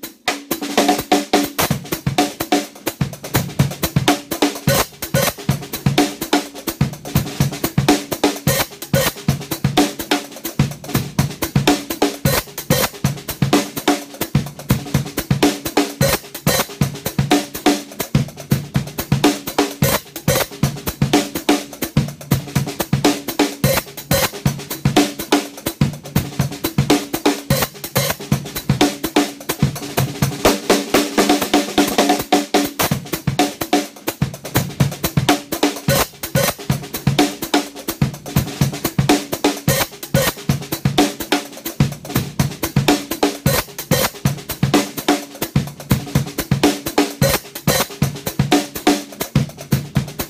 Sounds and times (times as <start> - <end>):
Percussion: 0.0 - 50.3.